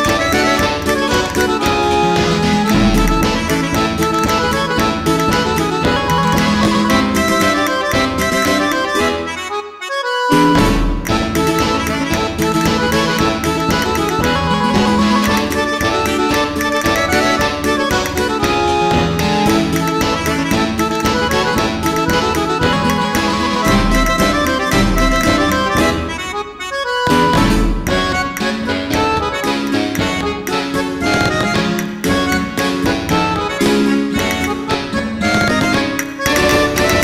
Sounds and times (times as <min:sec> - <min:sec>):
Music: 0:00.0 - 0:37.0.